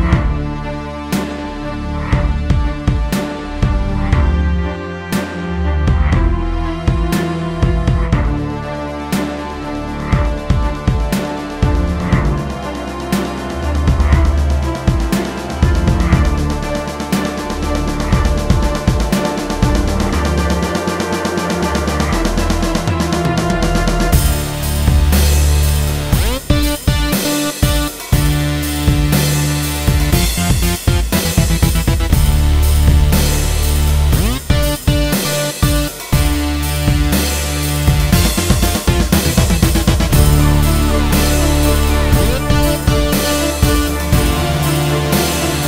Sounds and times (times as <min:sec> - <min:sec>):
Electronic music: 0:00.0 - 0:45.6.